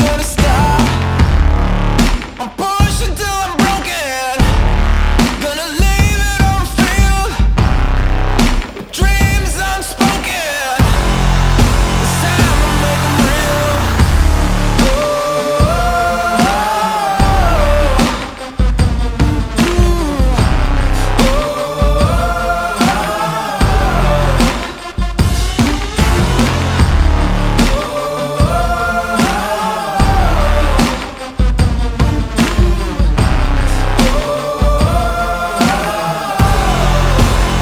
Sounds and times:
Music: 0:00.0 - 0:37.6.

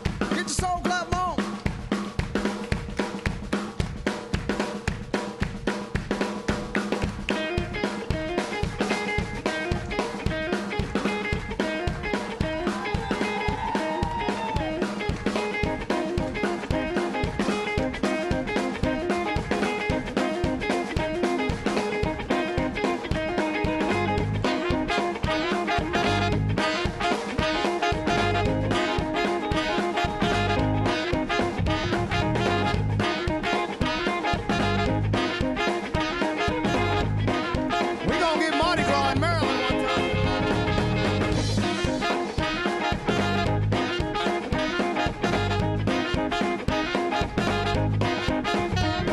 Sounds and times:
Music: 0:00.0 - 0:49.1.

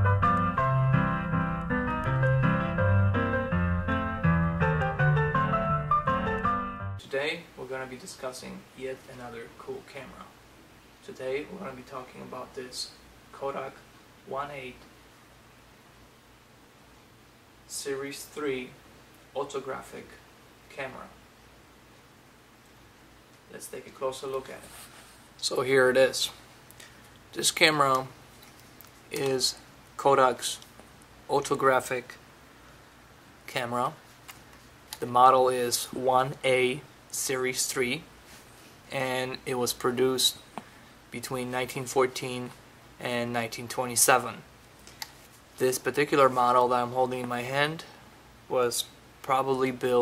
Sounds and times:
Speech: 0:07.0 - 0:10.4, 0:11.0 - 0:14.9, 0:17.7 - 0:18.8, 0:19.4 - 0:21.2, 0:23.5 - 0:24.8, 0:25.4 - 0:26.4, 0:27.3 - 0:28.2, 0:29.1 - 0:30.7, 0:31.3 - 0:32.2, 0:33.5 - 0:34.0, 0:35.0 - 0:38.1, 0:38.9 - 0:40.4, 0:41.1 - 0:44.5, 0:45.6 - 0:50.0.

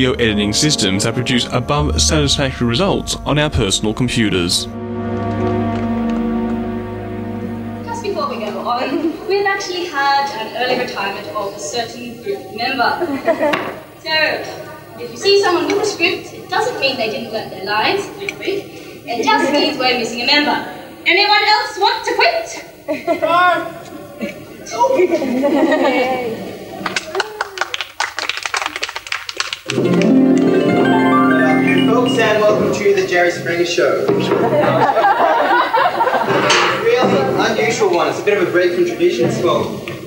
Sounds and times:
Music: 0:00.0 - 0:10.4, 0:29.7 - 0:33.1.

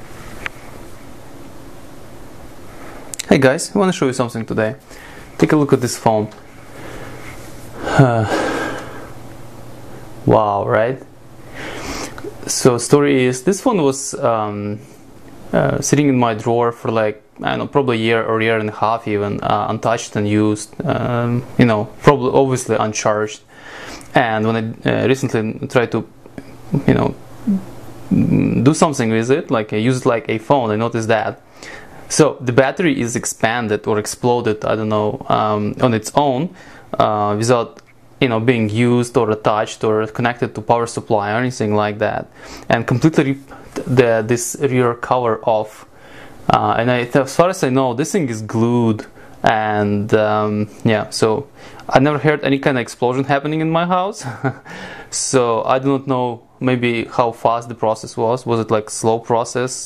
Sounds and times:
Speech: 0:03.2 - 0:04.8, 0:05.4 - 0:06.4, 0:08.0 - 0:08.4, 0:10.2 - 0:11.1, 0:12.3 - 0:14.9, 0:15.5 - 0:23.5, 0:24.1 - 0:31.4, 0:32.1 - 0:45.9, 0:46.5 - 0:59.8.

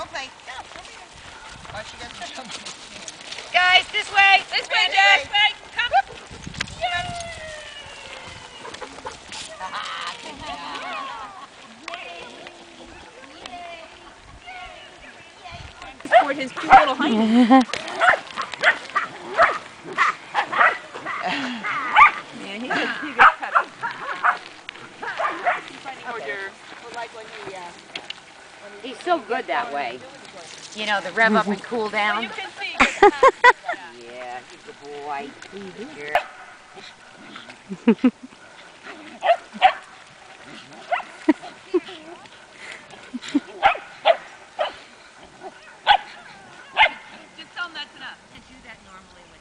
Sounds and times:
Canidae, dogs, wolves: 0:16.0 - 0:25.9, 0:36.0 - 0:47.4
Bow-wow: 0:17.9 - 0:25.7, 0:39.0 - 0:39.9, 0:40.5 - 0:41.2, 0:43.6 - 0:44.8, 0:45.4 - 0:47.2.

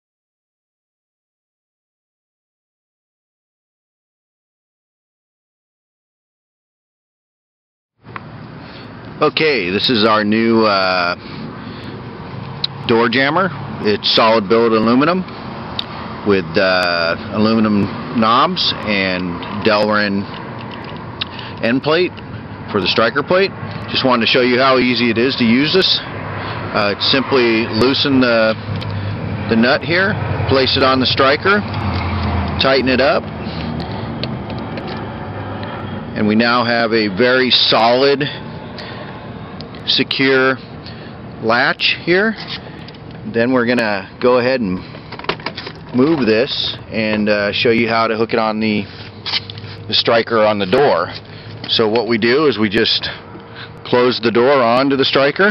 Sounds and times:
Speech: 0:09.2 - 0:11.2, 0:12.9 - 0:15.3, 0:16.2 - 0:20.3, 0:21.6 - 0:26.1, 0:26.7 - 0:28.6, 0:29.5 - 0:31.7, 0:32.6 - 0:33.2, 0:36.2 - 0:38.4, 0:39.9 - 0:40.6, 0:41.4 - 0:42.4, 0:43.2 - 0:44.8, 0:45.9 - 0:48.9, 0:49.9 - 0:53.2, 0:53.8 - 0:55.5.

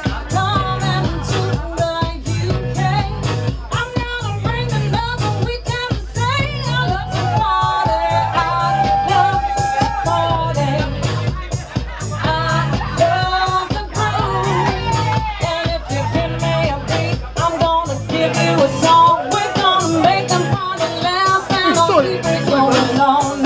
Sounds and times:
Music: 0:00.0 - 0:23.4.

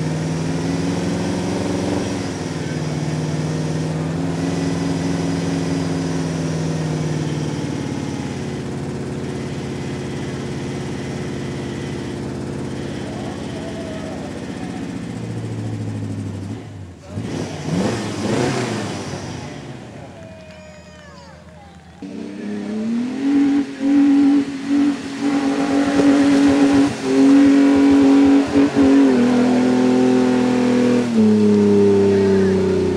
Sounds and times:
Accelerating, revving, vroom: 0:00.0 - 0:08.5, 0:16.4 - 0:19.7, 0:22.0 - 0:32.9
Medium engine (mid frequency): 0:00.0 - 0:32.9
Truck: 0:00.0 - 0:32.9
Speech: 0:02.5 - 0:03.4, 0:13.0 - 0:15.0, 0:17.0 - 0:17.3, 0:20.0 - 0:22.7, 0:32.1 - 0:32.8.

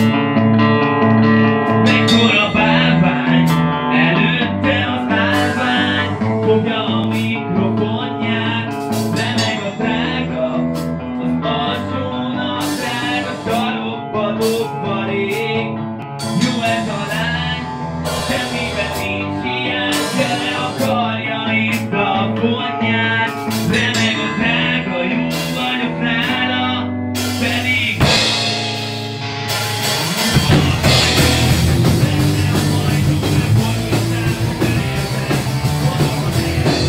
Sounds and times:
Rock and roll: 0:00.0 - 0:36.8.

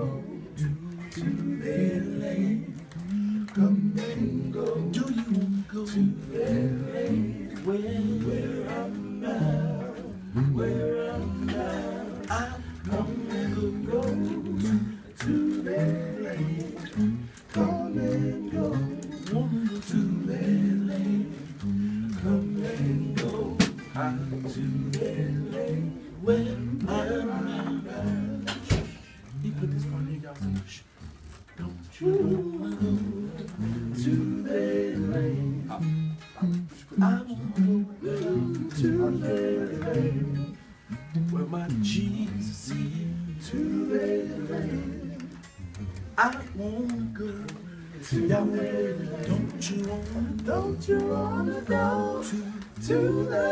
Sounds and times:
Male singing: 0:00.0 - 0:30.9, 0:31.6 - 0:45.4, 0:46.1 - 0:53.5
Music: 0:00.0 - 0:53.5.

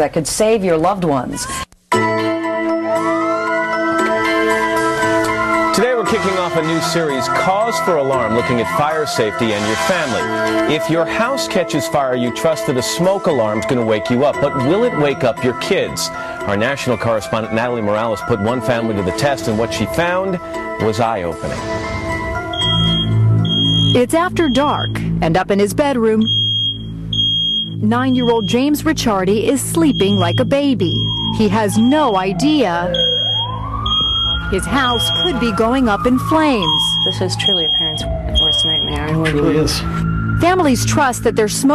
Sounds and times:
Police car (siren): 0:22.5 - 0:24.0, 0:29.8 - 0:41.7.

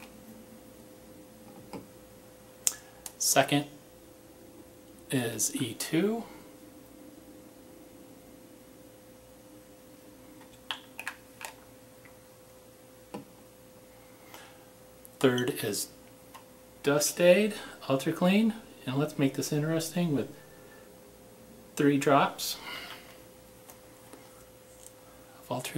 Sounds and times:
Speech: 0:03.2 - 0:03.7, 0:05.1 - 0:06.4, 0:15.2 - 0:16.0, 0:16.8 - 0:20.4, 0:21.8 - 0:22.6, 0:25.4 - 0:25.7.

